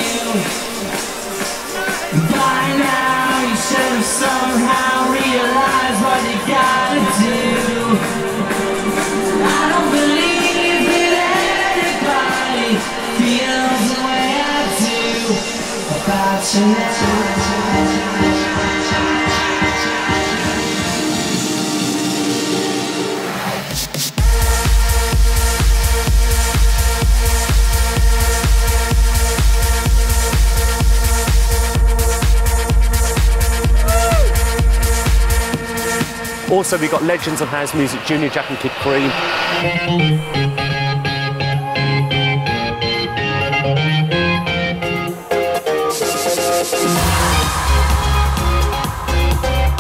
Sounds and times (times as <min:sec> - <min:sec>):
Electronic music: 0:00.0 - 0:49.8
Speech: 0:36.5 - 0:39.2.